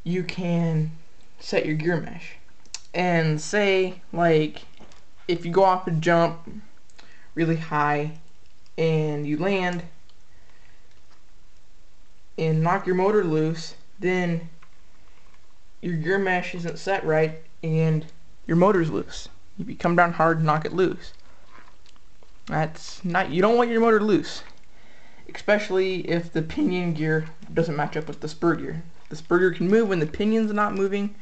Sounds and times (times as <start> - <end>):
Speech: 0.0 - 6.7, 7.4 - 10.0, 12.4 - 14.6, 15.8 - 21.2, 22.5 - 24.6, 25.3 - 31.2.